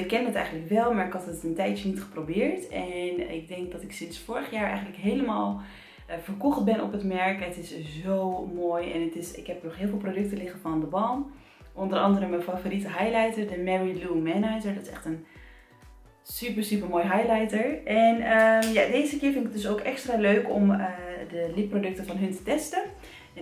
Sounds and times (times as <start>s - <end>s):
Speech: 0.0s - 15.2s, 16.3s - 23.4s.